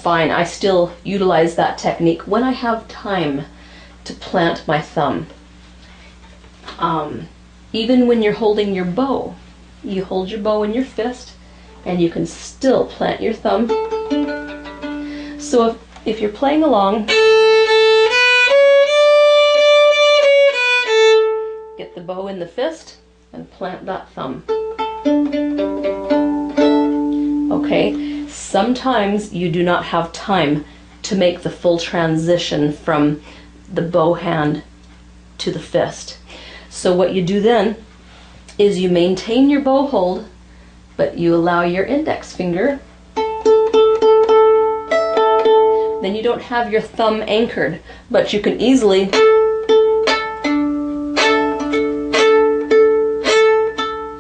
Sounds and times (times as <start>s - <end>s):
Pizzicato: 13.5s - 15.6s, 24.5s - 28.4s, 49.1s - 54.2s.